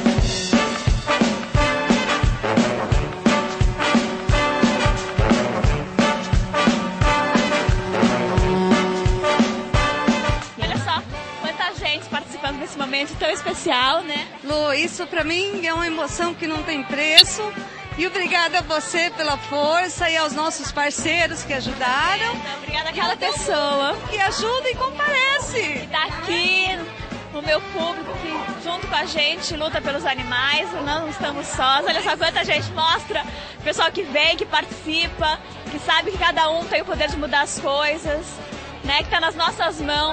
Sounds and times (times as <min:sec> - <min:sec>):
Music: 0:00.0 - 0:40.1
Speech: 0:10.6 - 0:40.1.